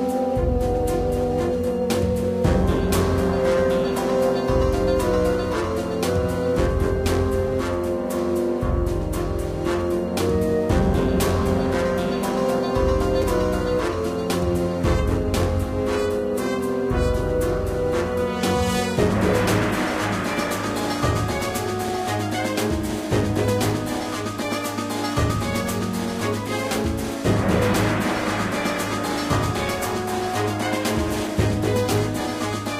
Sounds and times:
Video game music: 0.0 - 32.7.

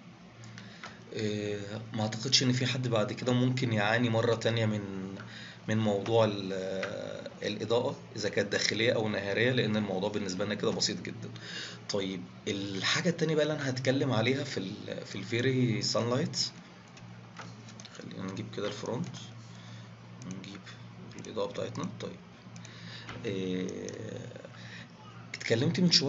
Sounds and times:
Speech: 1.1 - 16.6, 18.0 - 19.4, 20.2 - 22.2, 23.2 - 26.0.

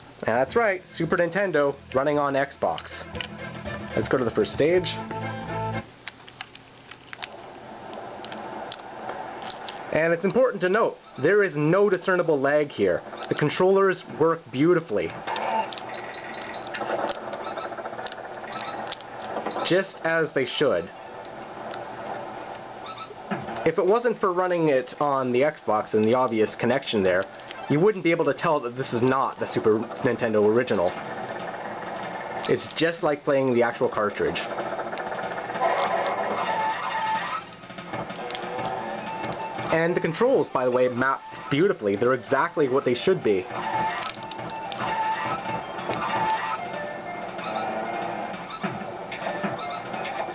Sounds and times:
Speech: 0.2 - 3.1, 4.0 - 5.0, 9.9 - 15.2, 19.6 - 20.9, 23.6 - 31.0, 32.4 - 34.5, 39.7 - 43.5
Music: 0.8 - 5.9, 36.4 - 50.3.

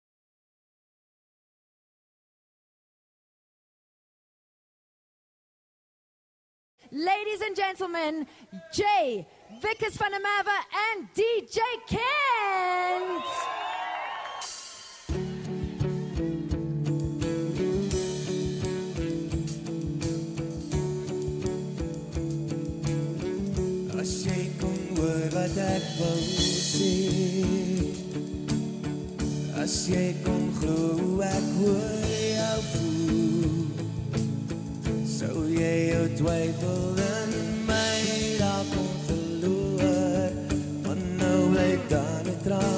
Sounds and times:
Speech: 6.9 - 13.4
Music: 14.3 - 42.7.

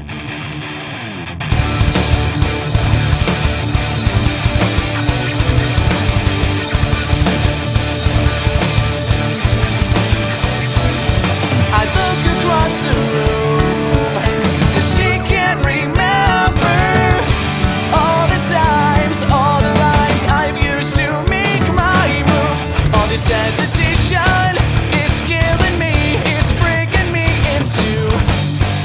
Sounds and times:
Exciting music: 1.5 - 28.8.

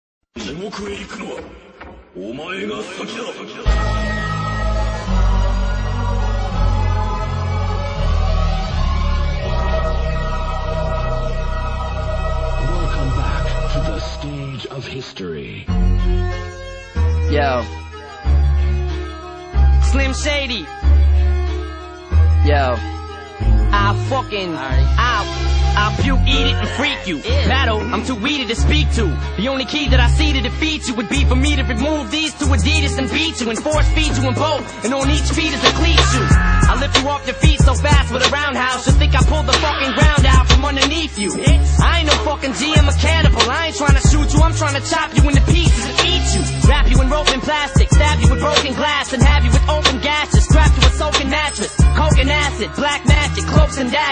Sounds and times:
Speech: 0.4 - 1.5, 2.2 - 3.7, 12.6 - 15.7, 17.3 - 17.7, 19.8 - 20.7, 22.4 - 22.8, 23.7 - 31.8
Music: 0.4 - 54.1.

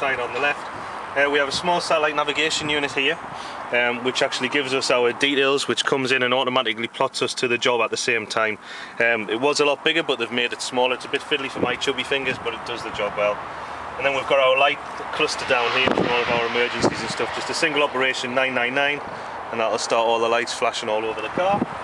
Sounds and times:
Speech: 0.0 - 0.6, 1.2 - 13.4, 14.0 - 21.7
Car passing by: 13.2 - 19.6.

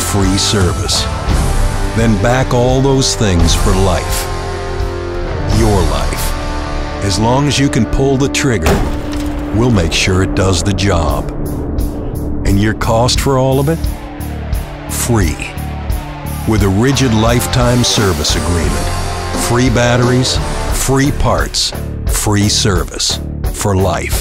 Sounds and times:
Speech: 0.0 - 1.1, 1.9 - 4.3, 5.4 - 6.3, 7.0 - 8.9, 9.5 - 11.3, 12.4 - 13.9, 14.9 - 15.6, 16.4 - 24.2
Music: 0.0 - 24.2.

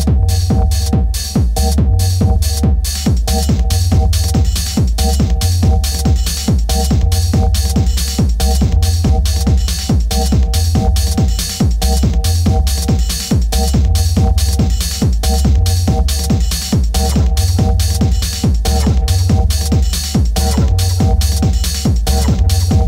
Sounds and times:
Dance music: 0.0 - 22.8
Disco: 0.0 - 22.8.

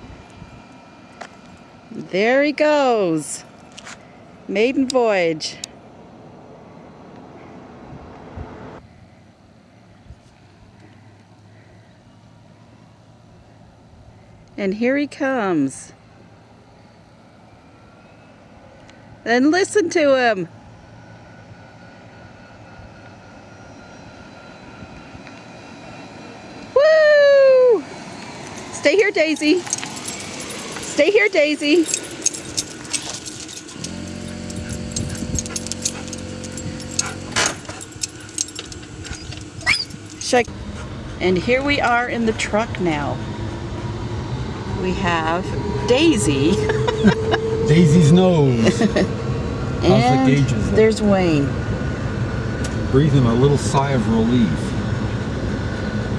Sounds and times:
Outside, urban or manmade: 0.0 - 56.1
Truck: 15.8 - 56.1
Speech: 41.2 - 43.2, 47.7 - 49.1, 49.8 - 51.5, 53.0 - 54.7.

